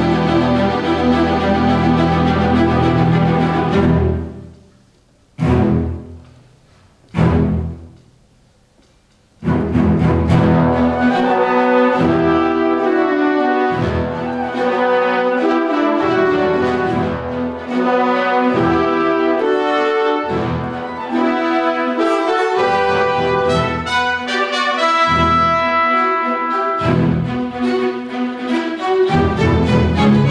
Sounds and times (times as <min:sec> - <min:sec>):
Classical music: 0:00.0 - 0:30.3
Orchestra: 0:00.0 - 0:30.3
French horn: 0:09.5 - 0:28.0.